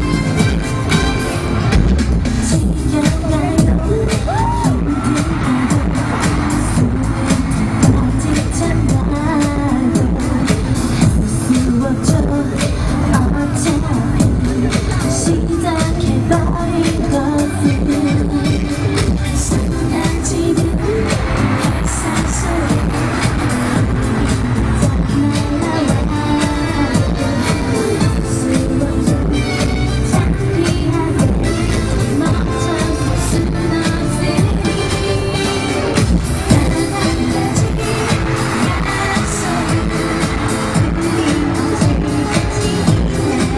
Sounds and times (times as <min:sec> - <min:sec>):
Music: 0:00.0 - 0:43.5.